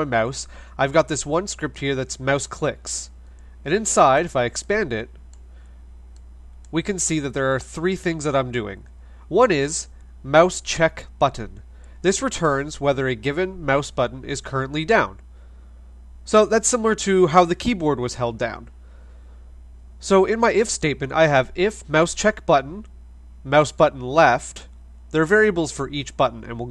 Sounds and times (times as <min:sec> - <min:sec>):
Speech: 0:00.0 - 0:05.2, 0:06.7 - 0:15.2, 0:16.2 - 0:18.7, 0:20.0 - 0:26.7.